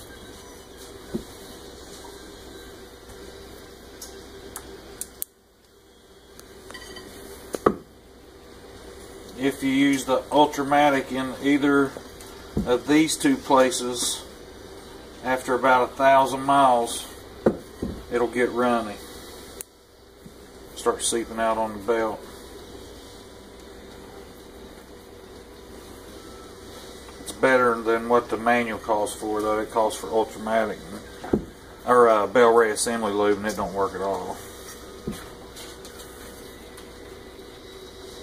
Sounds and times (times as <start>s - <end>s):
Speech: 9.4s - 12.0s, 12.6s - 14.3s, 15.2s - 17.1s, 18.1s - 19.0s, 20.8s - 22.2s, 27.3s - 31.0s, 31.8s - 34.4s.